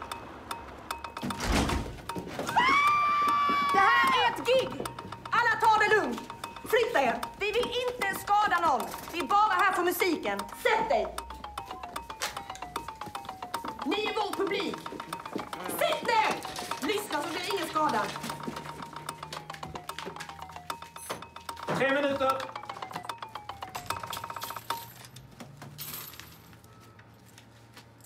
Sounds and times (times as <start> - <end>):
Music: 0.1 - 25.0.